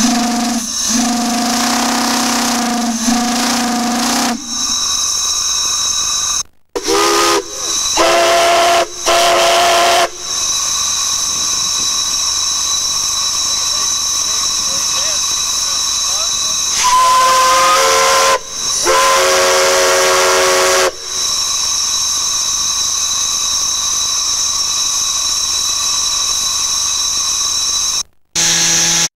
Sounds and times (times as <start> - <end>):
Steam whistle: 0.0 - 6.2, 6.8 - 22.9
Steam: 0.0 - 29.1.